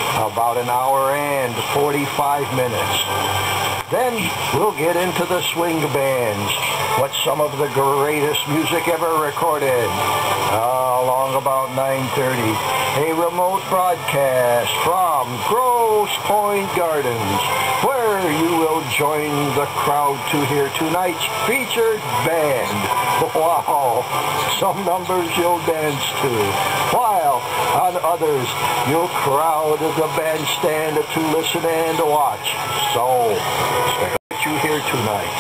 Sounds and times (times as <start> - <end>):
Music: 0.0 - 35.4
Radio: 0.0 - 35.4
Speech: 0.1 - 3.1, 3.9 - 35.4.